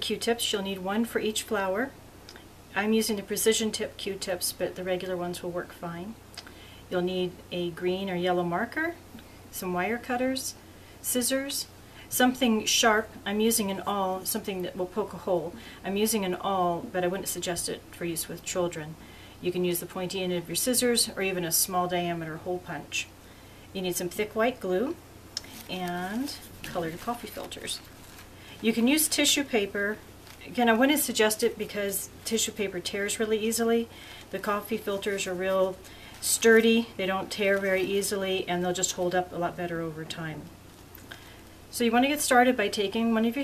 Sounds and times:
Speech: 0:00.0 - 0:02.0, 0:02.7 - 0:06.2, 0:06.9 - 0:23.1, 0:23.7 - 0:27.9, 0:28.6 - 0:40.6, 0:41.7 - 0:43.4.

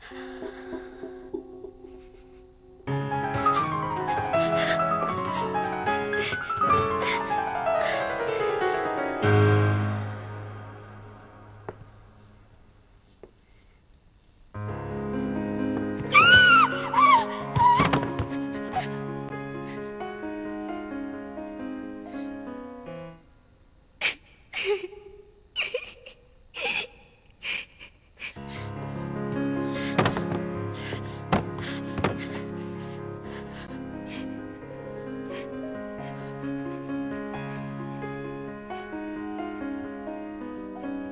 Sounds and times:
Music: 0:00.0 - 0:12.6, 0:14.6 - 0:23.6, 0:28.4 - 0:41.1.

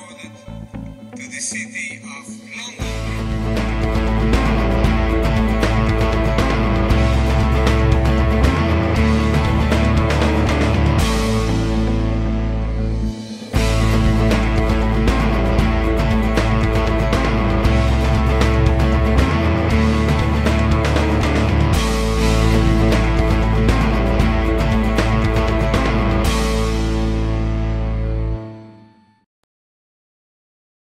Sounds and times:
Music: 0:00.0 - 0:29.3.

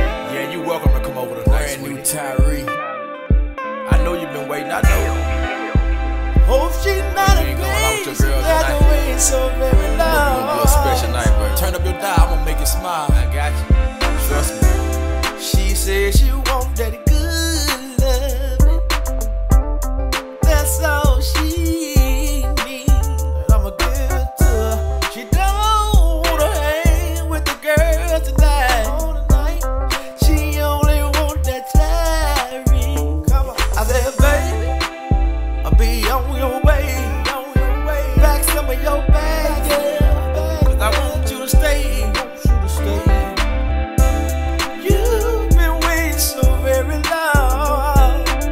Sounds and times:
Music: 0:00.0 - 0:48.5.

